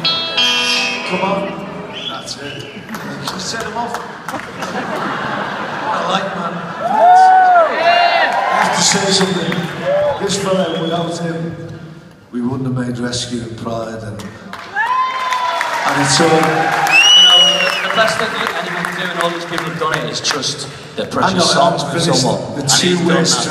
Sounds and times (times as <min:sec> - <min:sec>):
Inside, public space: 0:00.0 - 0:23.5.